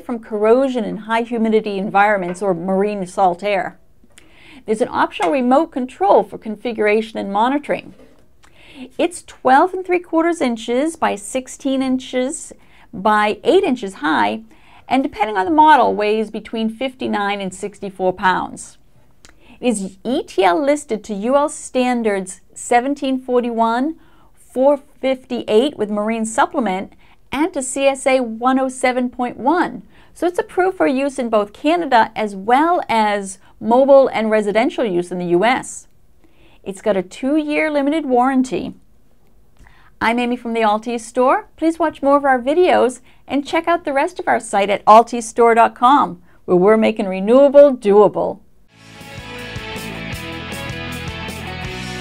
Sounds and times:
Speech: 0.0 - 3.8, 4.7 - 8.0, 8.8 - 18.8, 19.6 - 35.9, 36.7 - 38.8, 40.0 - 48.4.

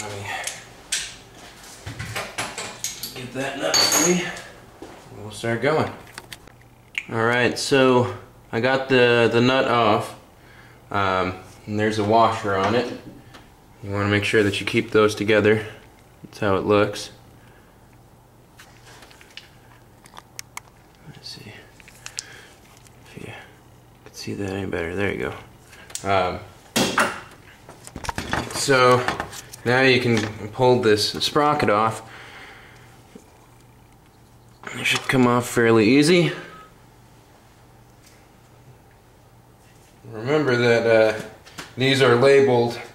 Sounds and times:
Speech: 0.0 - 0.5, 3.1 - 4.5, 5.1 - 6.0, 7.1 - 10.2, 10.9 - 13.1, 13.8 - 17.2, 21.0 - 21.7, 24.1 - 26.5, 28.5 - 32.0, 34.7 - 36.5, 40.0 - 42.9.

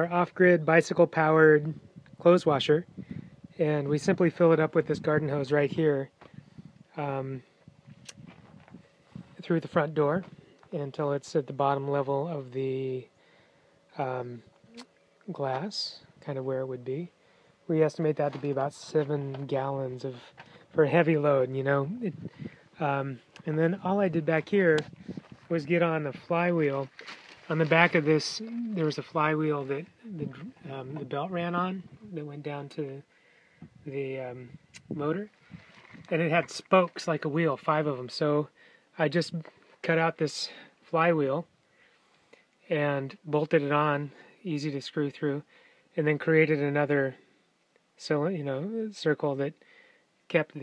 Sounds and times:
Speech: 0.0 - 2.9, 3.6 - 6.1, 6.9 - 7.5, 9.4 - 13.1, 14.0 - 17.1, 17.7 - 24.9, 25.5 - 33.1, 33.9 - 35.3, 36.1 - 41.5, 42.6 - 45.4, 46.0 - 47.2, 48.0 - 49.6, 50.3 - 50.6.

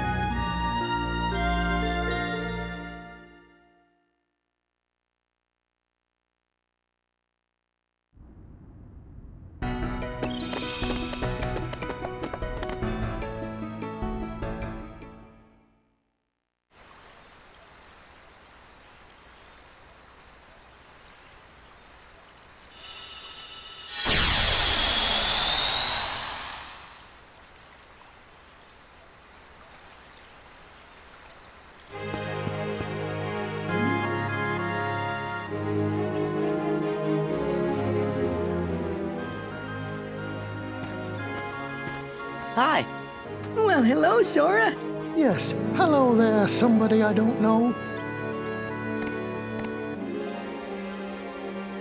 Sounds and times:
Music: 0.0 - 4.3, 9.6 - 16.0, 31.9 - 51.8.

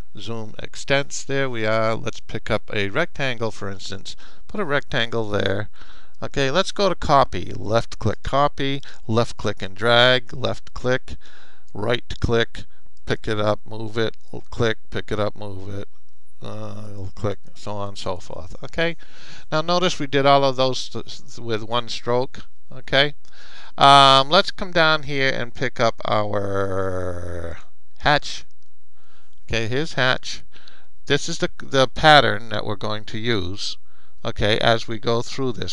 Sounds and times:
Speech: 0.2 - 11.2, 11.8 - 28.5, 29.5 - 30.5, 31.1 - 35.7.

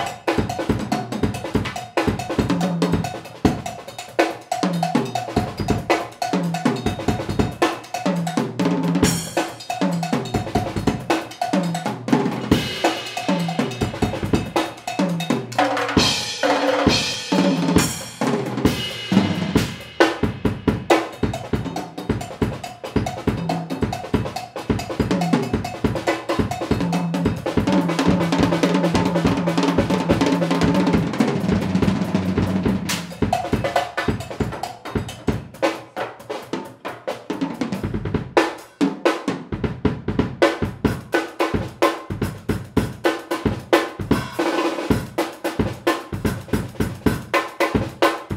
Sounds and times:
Drum: 0.0 - 48.3
Drum kit: 0.0 - 48.3.

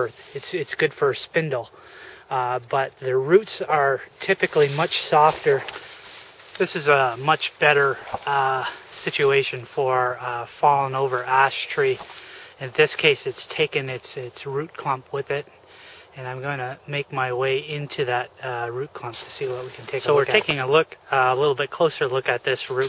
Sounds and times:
Speech: 0.0 - 1.7, 2.3 - 5.8, 6.6 - 15.5, 16.2 - 22.8.

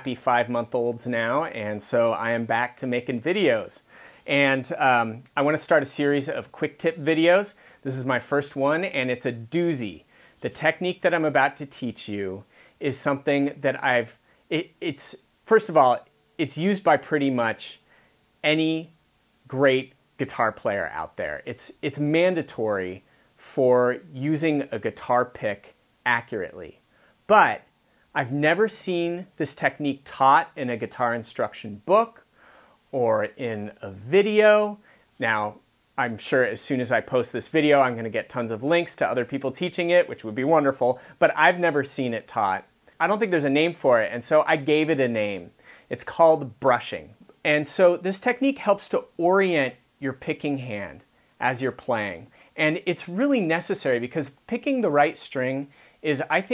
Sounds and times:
Speech: 0.0 - 17.8, 18.4 - 32.2, 32.9 - 56.5.

